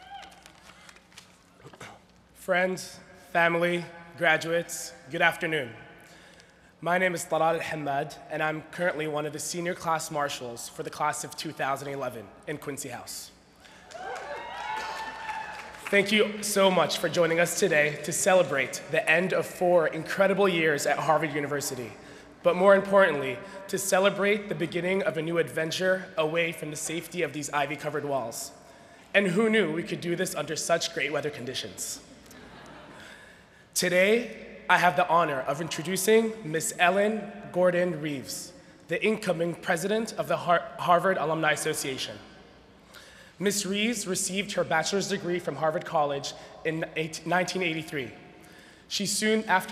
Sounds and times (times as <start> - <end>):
Narration, monologue: 0.2 - 14.1, 15.6 - 49.7
Male speech, man speaking: 1.7 - 5.8, 6.8 - 13.3, 15.9 - 32.0, 33.8 - 42.3, 43.4 - 48.2, 48.9 - 49.7.